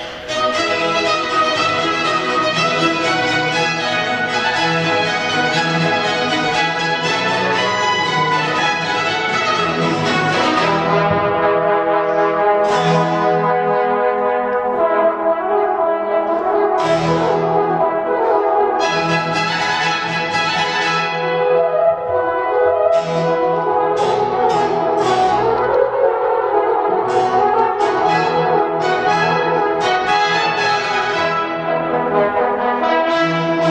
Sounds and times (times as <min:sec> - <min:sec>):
Classical music: 0:00.0 - 0:33.7
Orchestra: 0:00.0 - 0:33.7.